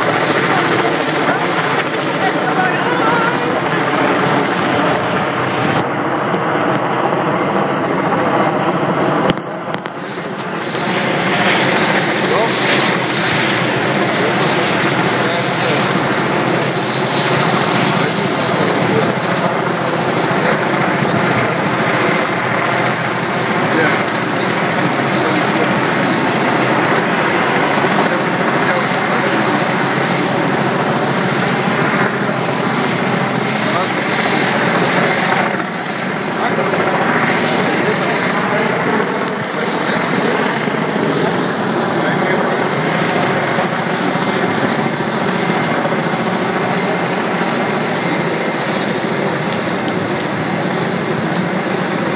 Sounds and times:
Speech: 0.0 - 5.2, 10.8 - 22.7, 23.4 - 50.4.

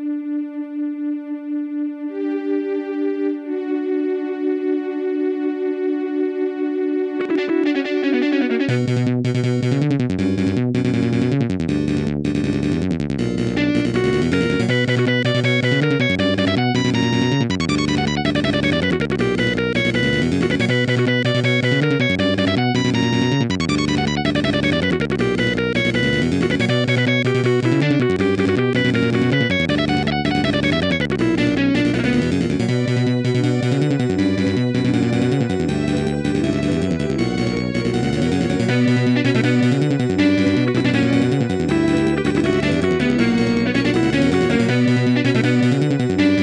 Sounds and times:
Video game music: 0.0 - 46.4.

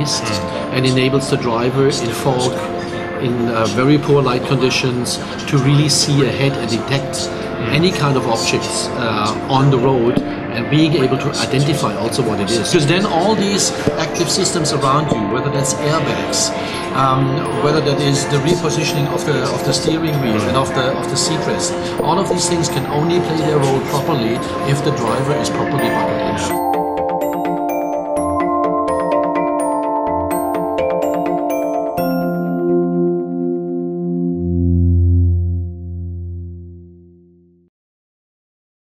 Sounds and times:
Glockenspiel: 0.0 - 33.8.

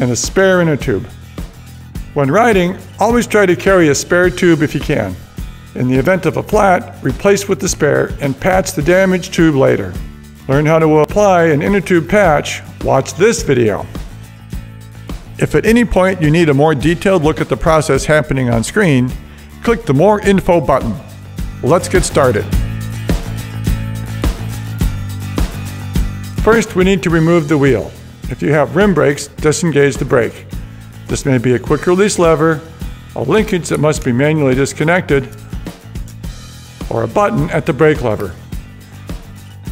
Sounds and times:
Speech: 0.0 - 1.1, 2.2 - 5.2, 5.8 - 13.9, 15.4 - 22.6, 26.4 - 30.5, 31.1 - 35.4, 36.9 - 38.4
Music: 0.0 - 39.7.

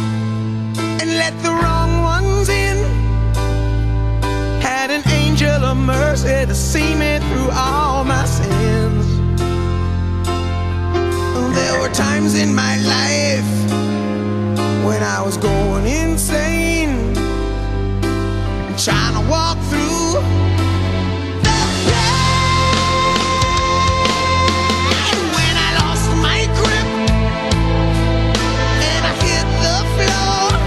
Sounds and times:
Christian music: 0.0 - 30.6.

